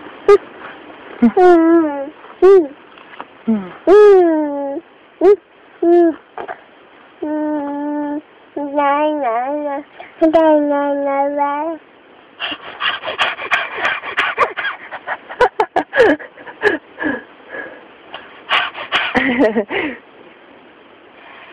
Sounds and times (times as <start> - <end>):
Laughter: 15.3 - 16.9, 19.2 - 20.0.